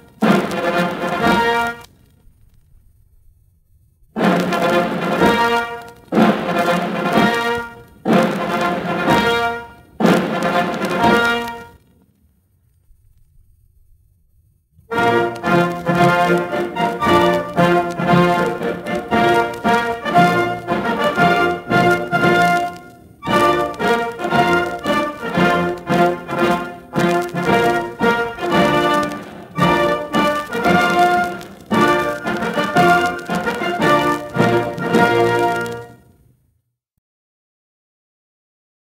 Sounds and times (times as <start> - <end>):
Music: 0.0 - 1.9, 4.1 - 11.9, 14.9 - 36.2.